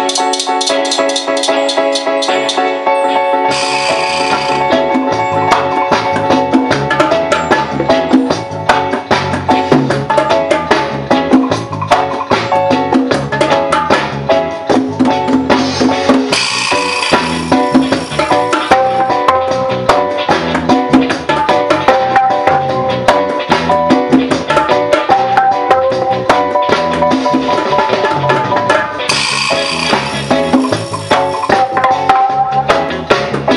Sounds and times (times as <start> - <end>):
Wood block: 0.0 - 2.7, 3.5 - 12.6, 16.2 - 20.0, 24.4 - 32.8.